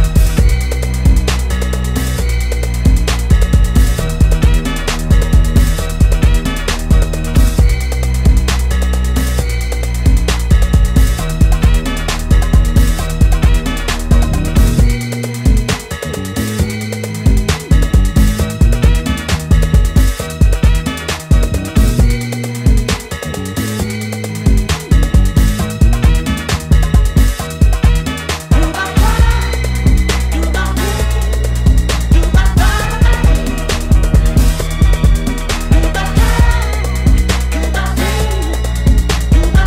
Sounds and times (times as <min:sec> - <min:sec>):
Music: 0:00.0 - 0:39.6.